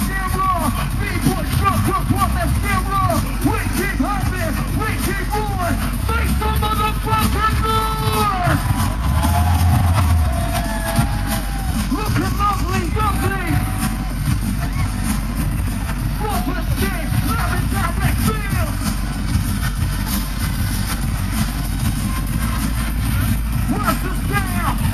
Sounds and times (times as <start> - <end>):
Speech: 0.0 - 8.6, 11.9 - 13.7, 16.2 - 18.8, 23.6 - 24.9
Pop music: 0.0 - 24.9
Rhythm and blues: 0.0 - 24.9.